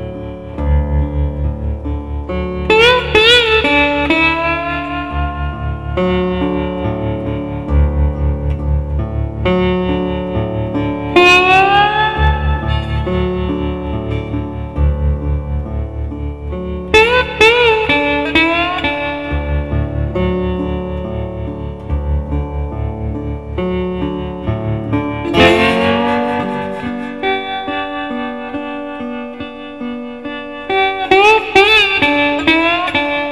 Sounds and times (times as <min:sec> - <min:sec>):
Tapping (guitar technique): 0:01.8 - 0:33.3.